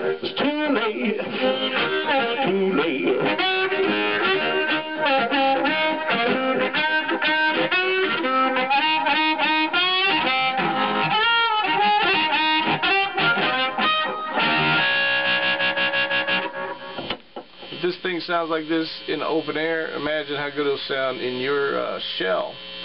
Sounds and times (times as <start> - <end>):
Harmonica: 0.0 - 17.1
Speech: 17.8 - 22.6.